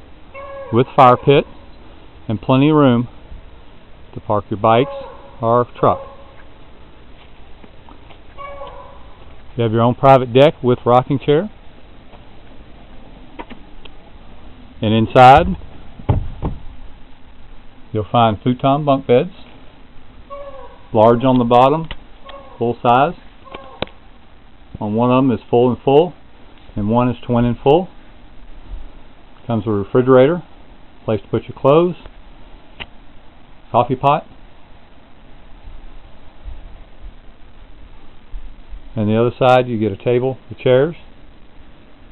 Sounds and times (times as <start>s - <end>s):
Speech: 0.8s - 1.5s, 2.3s - 3.1s, 4.2s - 6.0s, 9.6s - 11.6s, 14.8s - 15.6s, 18.0s - 19.5s, 21.0s - 21.9s, 22.6s - 23.2s, 24.8s - 26.2s, 26.8s - 28.0s, 29.5s - 30.5s, 31.1s - 32.1s, 33.7s - 34.3s, 39.0s - 41.1s.